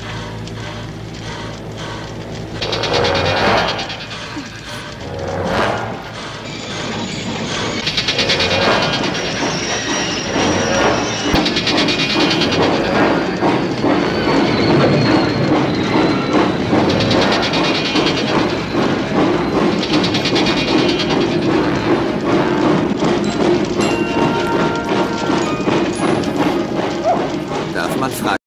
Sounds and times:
Engine: 0.0s - 24.4s
Speech: 27.7s - 28.4s.

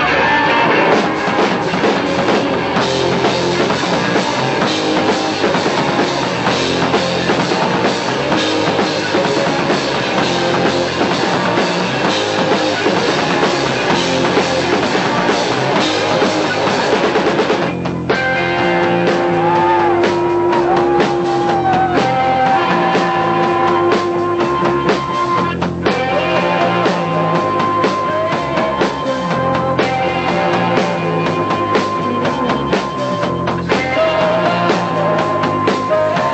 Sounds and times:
Independent music: 0.0s - 36.3s.

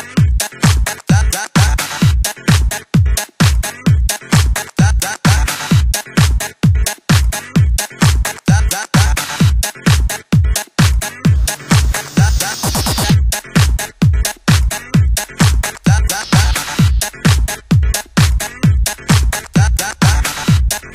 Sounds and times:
Disco: 0.0s - 20.9s
Electronica: 0.0s - 20.9s
Techno: 0.0s - 20.9s.

